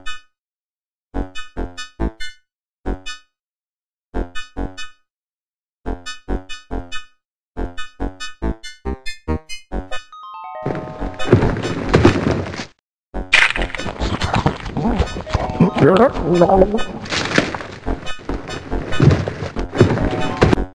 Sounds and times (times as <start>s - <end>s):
Music: 7.6s - 11.4s, 15.3s - 16.5s.